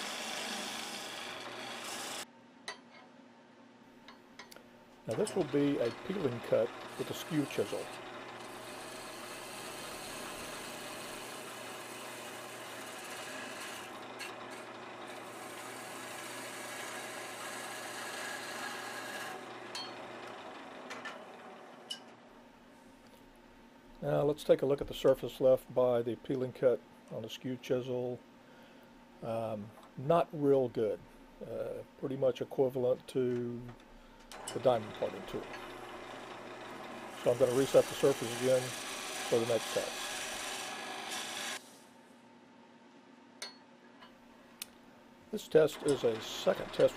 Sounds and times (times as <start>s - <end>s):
Filing (rasp): 0.0s - 2.3s, 5.2s - 19.4s, 34.5s - 41.6s, 45.8s - 46.9s.